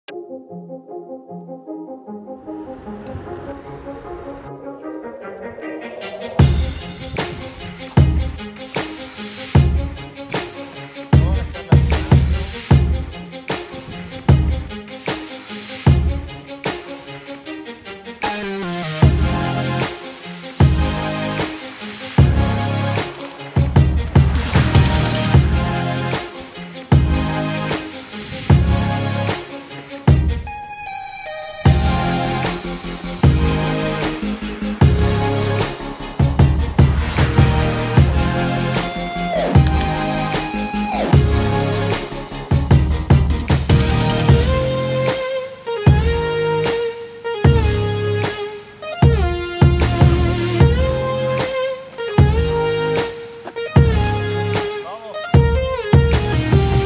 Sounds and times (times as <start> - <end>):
Music: 0.0 - 56.8.